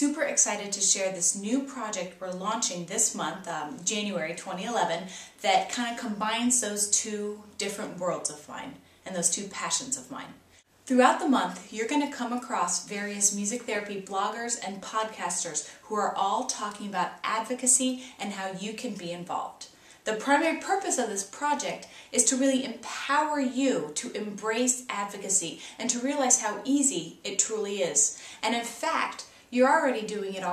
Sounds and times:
Speech: 0.0s - 30.5s.

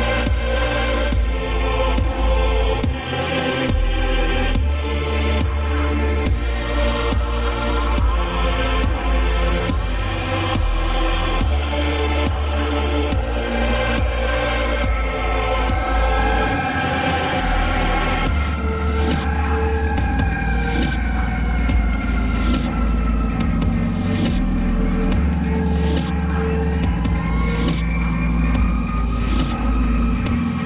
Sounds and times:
Dubstep: 4.6s - 30.6s.

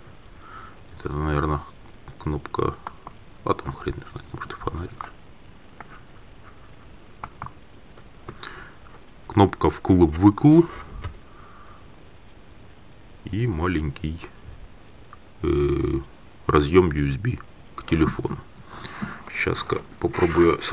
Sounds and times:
Speech: 1.0s - 2.8s, 3.4s - 5.1s, 9.3s - 10.8s, 13.2s - 14.4s, 15.4s - 18.4s, 19.3s - 20.7s.

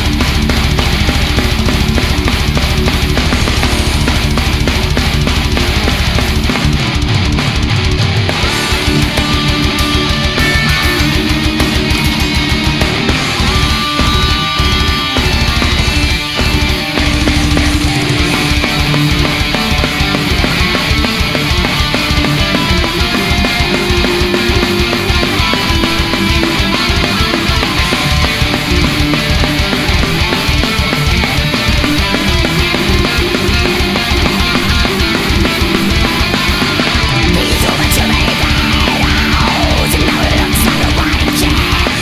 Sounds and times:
Music: 0.0s - 42.0s.

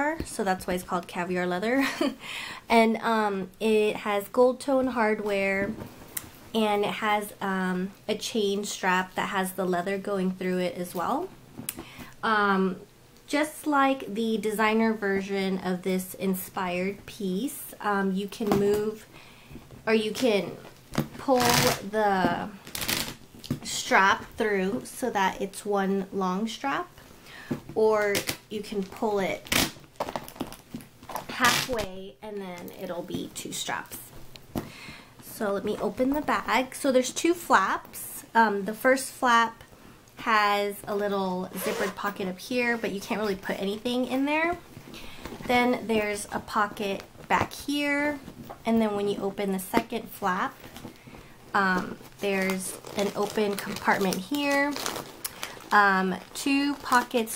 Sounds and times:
Speech: 0.0s - 2.1s, 2.7s - 5.8s, 6.6s - 11.3s, 12.2s - 19.1s, 19.9s - 22.6s, 23.6s - 26.9s, 27.8s - 29.4s, 31.3s - 34.1s, 35.2s - 39.6s, 40.2s - 44.6s, 45.5s - 50.6s, 51.6s - 54.9s, 55.7s - 57.3s.

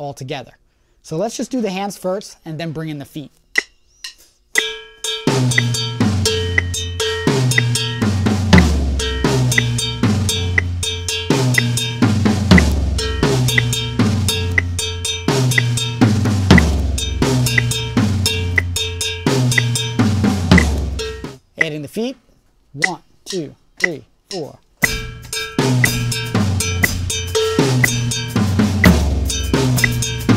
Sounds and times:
Drum kit: 3.6s - 21.8s, 22.8s - 30.3s
Bass drum: 5.3s - 21.4s, 24.8s - 30.3s
Rimshot: 15.3s - 18.4s, 19.3s - 21.1s.

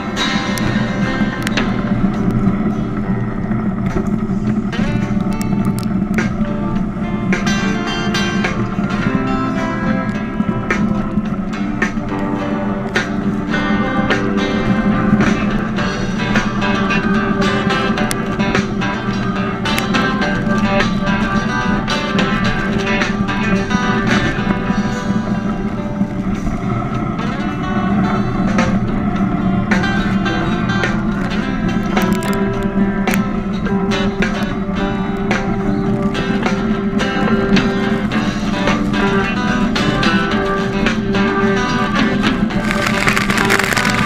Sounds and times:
Boat, Water vehicle: 0.0s - 44.0s.

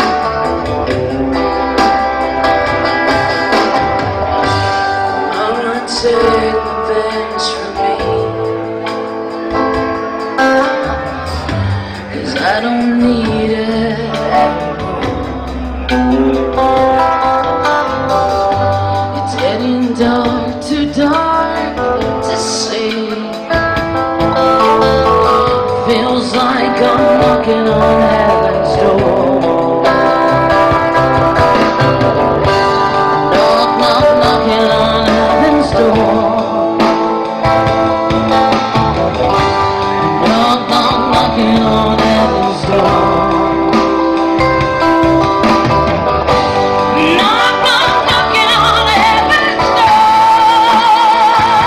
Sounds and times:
Music: 0.0s - 51.6s
Female singing: 5.3s - 8.7s, 12.1s - 15.2s, 19.2s - 23.6s, 25.8s - 29.7s, 33.3s - 36.5s, 46.9s - 51.6s.

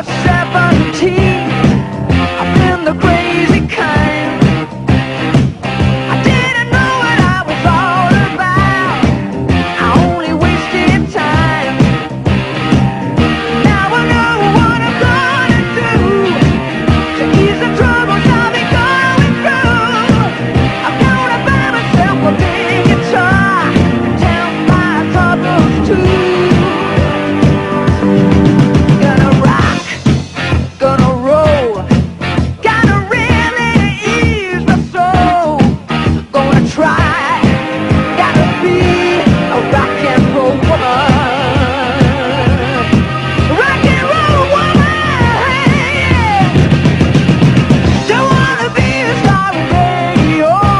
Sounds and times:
Rock and roll: 0.0s - 50.7s.

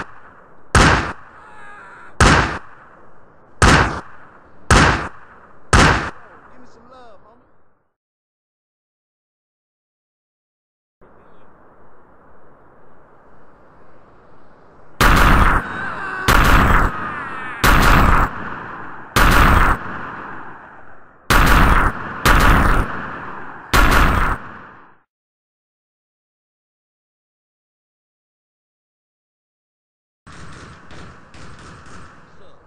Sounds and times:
Speech: 6.2s - 7.5s, 11.0s - 11.6s, 32.3s - 32.6s.

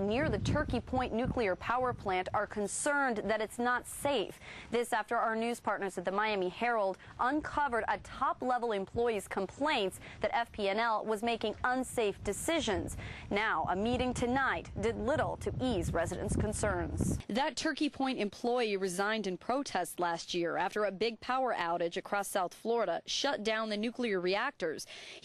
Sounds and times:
Speech: 0.0s - 25.2s.

